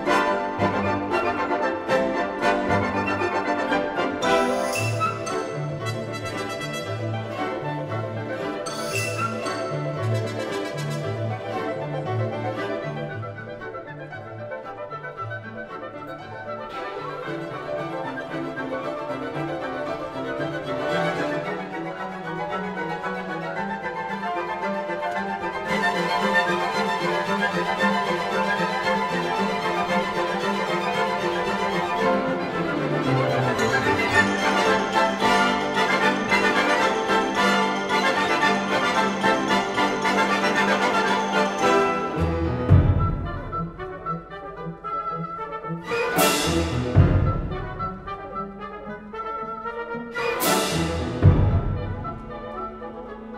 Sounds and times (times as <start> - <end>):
Music: 0.0 - 53.3.